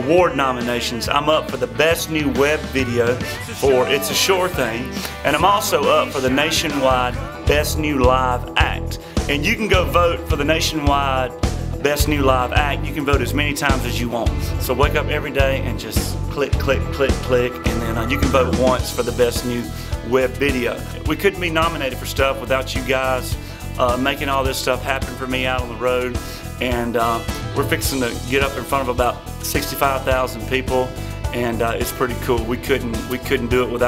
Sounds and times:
Music: 0.0 - 33.8
Speech: 0.0 - 33.8.

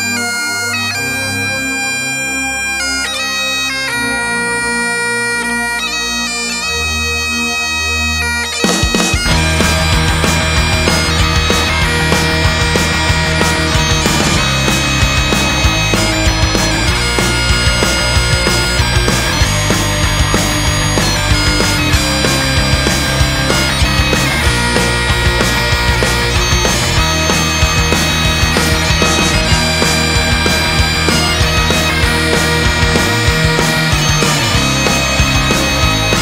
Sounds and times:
Music: 0.0 - 36.2.

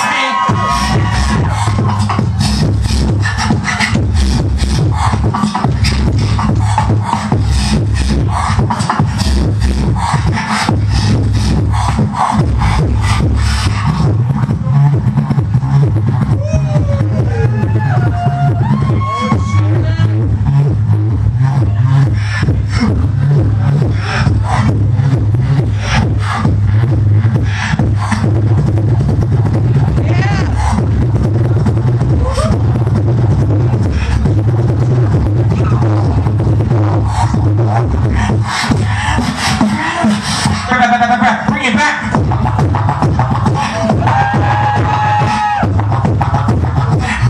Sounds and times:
Beatboxing: 0.0 - 47.3.

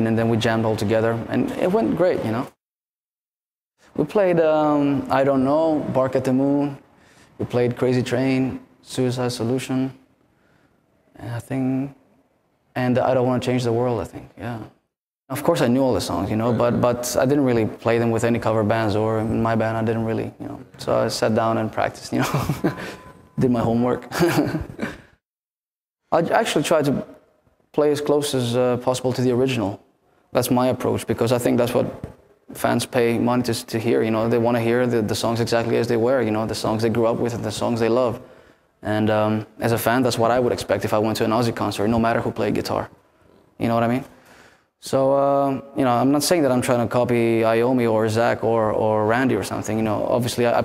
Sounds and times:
Speech: 0.0 - 2.6, 4.0 - 6.8, 7.4 - 10.0, 11.1 - 12.0, 12.7 - 22.7, 23.4 - 24.3, 26.1 - 38.2, 38.8 - 43.0, 43.6 - 44.1, 44.8 - 50.6.

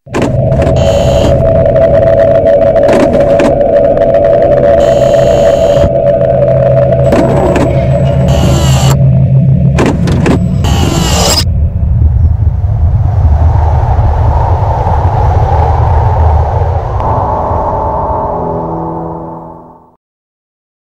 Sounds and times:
Music: 17.0 - 20.0.

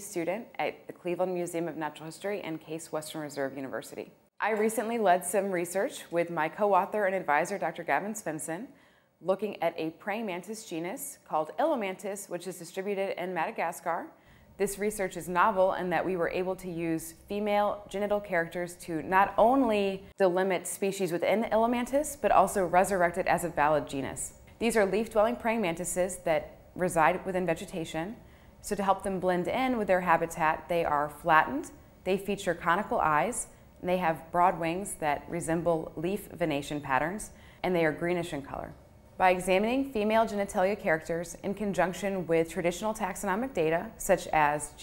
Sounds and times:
Speech: 0.0 - 44.8.

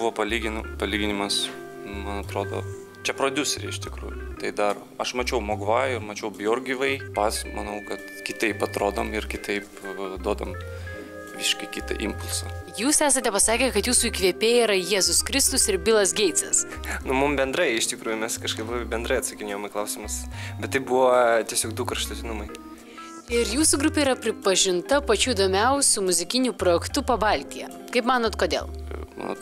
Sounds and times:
Music: 0.0 - 29.4
Speech: 11.4 - 22.6.

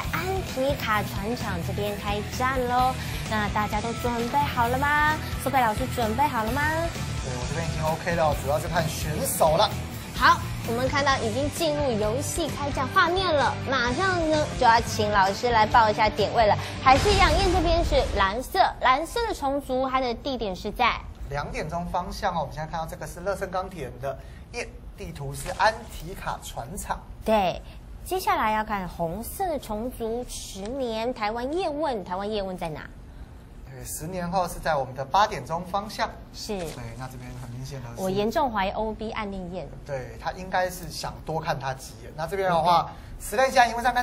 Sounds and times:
Music: 0.0 - 18.3.

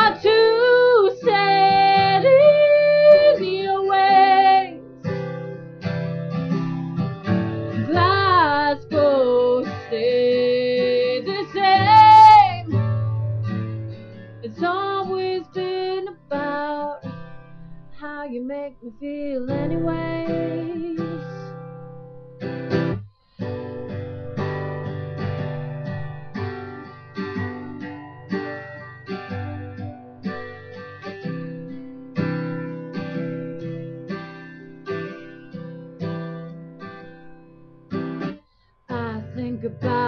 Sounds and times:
Acoustic guitar: 0.0 - 40.0.

